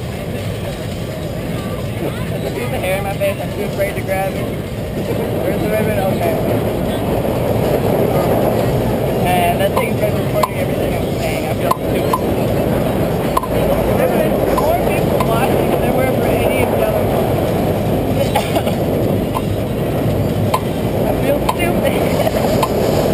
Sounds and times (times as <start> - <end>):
Speech: 0.0 - 7.1, 9.2 - 17.2, 21.0 - 22.7.